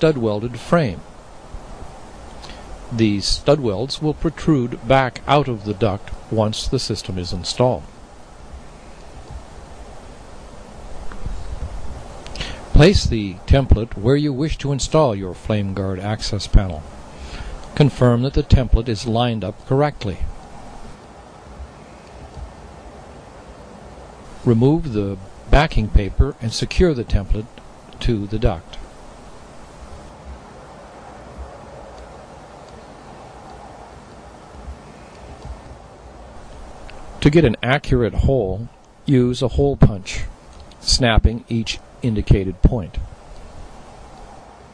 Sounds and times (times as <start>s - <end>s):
Speech: 0.0s - 1.1s, 2.9s - 7.9s, 12.8s - 16.9s, 17.8s - 20.3s, 24.5s - 28.8s, 37.2s - 43.1s.